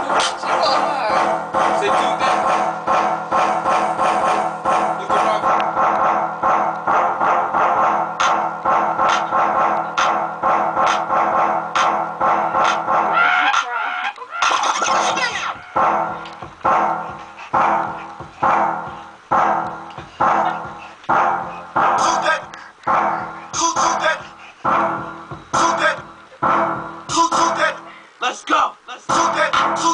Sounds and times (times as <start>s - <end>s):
Music: 0.0s - 29.9s.